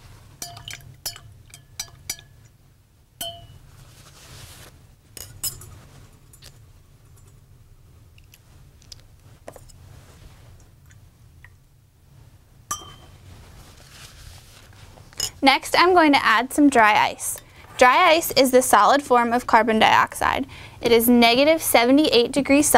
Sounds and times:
Water: 0:00.2 - 0:02.6, 0:10.5 - 0:11.8
Speech: 0:15.4 - 0:22.7.

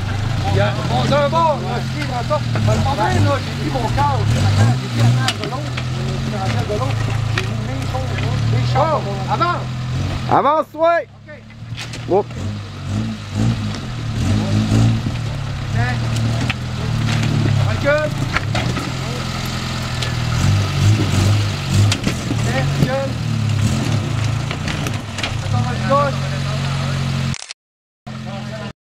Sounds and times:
Speech: 0:00.4 - 0:09.7, 0:10.3 - 0:11.5, 0:15.8 - 0:16.1, 0:17.6 - 0:18.2, 0:22.4 - 0:23.2, 0:25.4 - 0:27.1, 0:28.2 - 0:28.8.

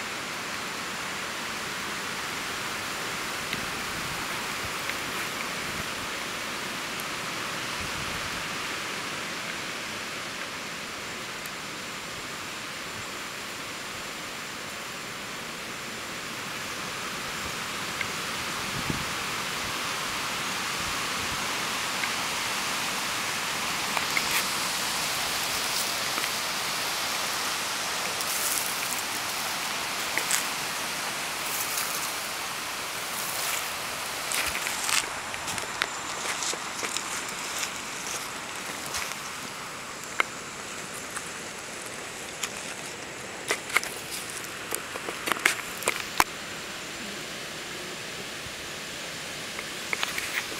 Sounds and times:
Rustling leaves: 0:00.0 - 0:50.5.

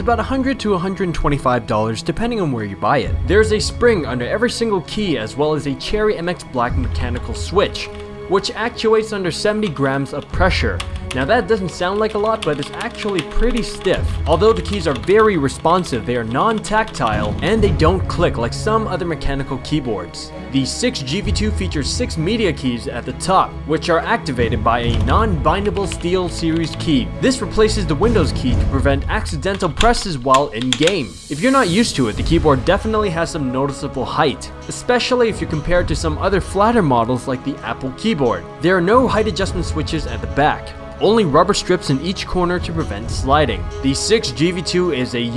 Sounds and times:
Music: 0:00.0 - 0:45.3
Speech: 0:00.0 - 0:45.3
Computer keyboard: 0:07.0 - 0:08.1, 0:09.5 - 0:17.8, 0:24.8 - 0:27.0, 0:29.4 - 0:31.5.

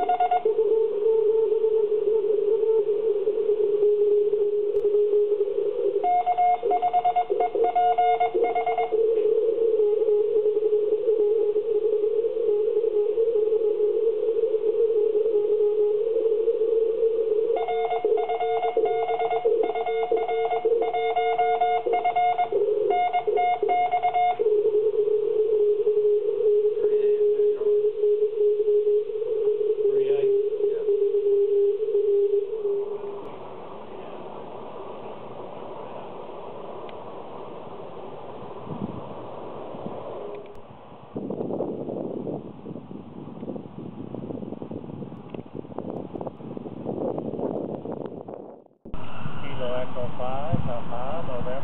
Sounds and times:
Speech: 0:26.8 - 0:27.8, 0:29.9 - 0:30.9, 0:49.4 - 0:51.6.

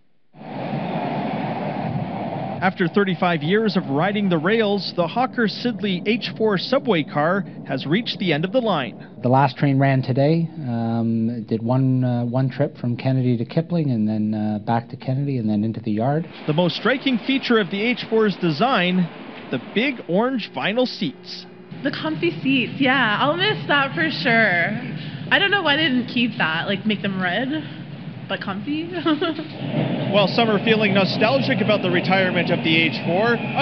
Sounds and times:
Speech: 0:02.6 - 0:27.7, 0:28.3 - 0:29.5, 0:30.1 - 0:33.6.

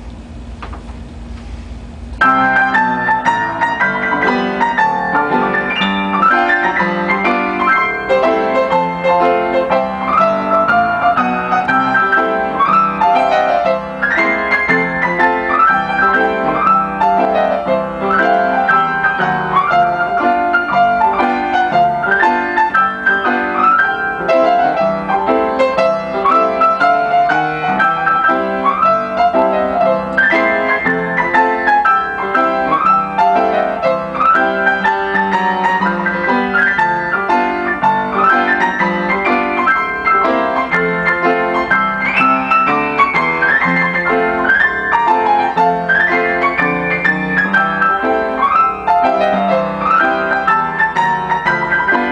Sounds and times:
Piano: 0:00.0 - 0:52.1.

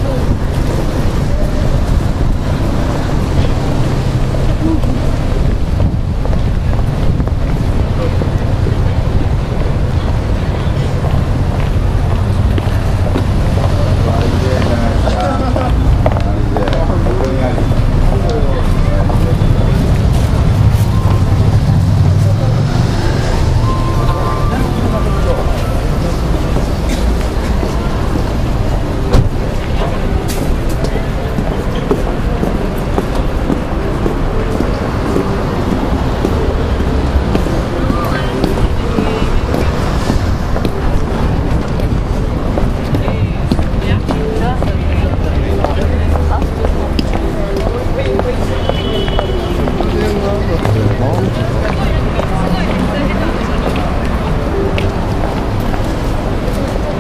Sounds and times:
Speech: 0:06.4 - 0:57.0
Music: 0:20.6 - 0:26.3.

